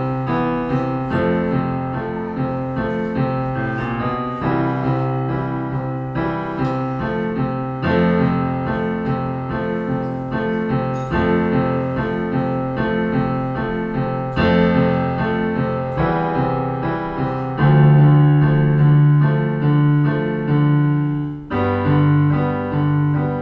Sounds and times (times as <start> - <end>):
Electric piano: 0.0 - 23.4.